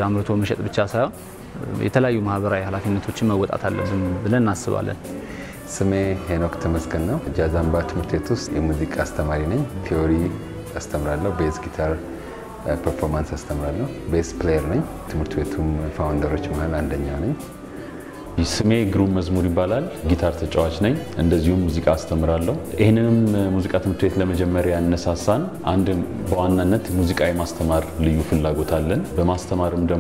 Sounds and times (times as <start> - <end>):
Speech: 0.0 - 5.1, 5.7 - 12.0, 12.6 - 17.5, 18.4 - 30.0
Soul music: 0.0 - 30.0.